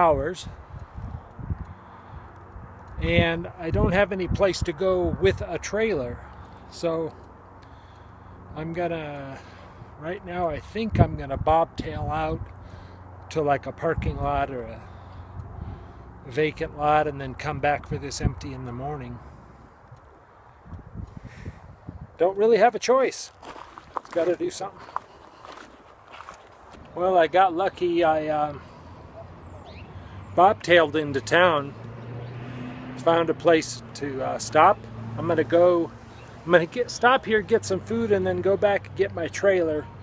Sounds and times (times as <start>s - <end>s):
Speech: 0.0s - 0.5s, 3.0s - 7.1s, 8.6s - 9.4s, 10.0s - 12.4s, 13.3s - 14.8s, 16.3s - 19.2s, 22.2s - 23.3s, 24.1s - 24.8s, 27.0s - 28.6s, 30.4s - 31.7s, 33.0s - 35.9s, 36.5s - 39.9s.